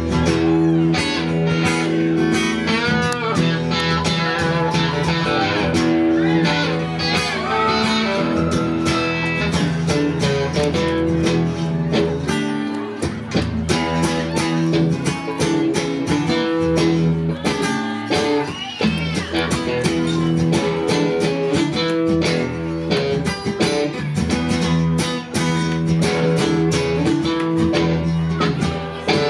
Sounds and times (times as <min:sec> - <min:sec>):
Guitar: 0:00.0 - 0:29.2.